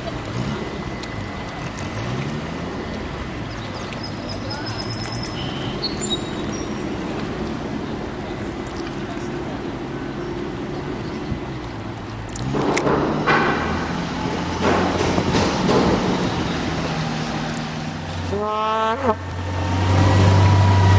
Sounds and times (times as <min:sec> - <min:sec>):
Vehicle: 0:00.0 - 0:20.9.